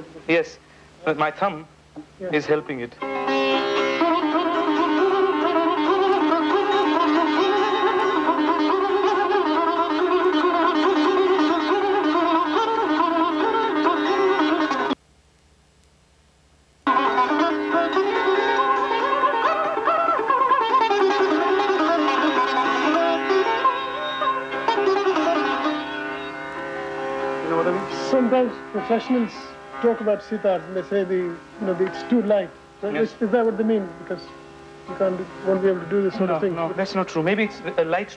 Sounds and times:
Speech: 0.0s - 3.0s, 27.4s - 34.3s, 34.9s - 38.1s
Sitar: 2.4s - 15.0s, 16.9s - 38.1s.

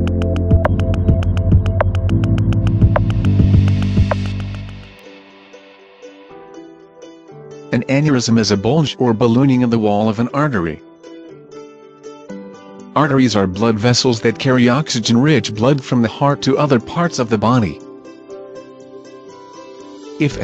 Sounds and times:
Music: 0.0s - 20.4s.

